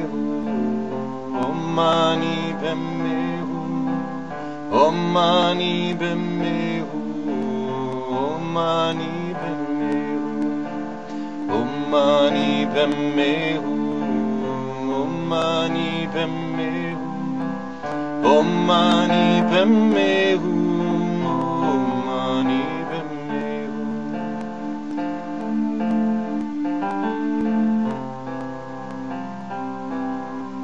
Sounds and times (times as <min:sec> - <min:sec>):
Mantra: 0:00.0 - 0:28.2.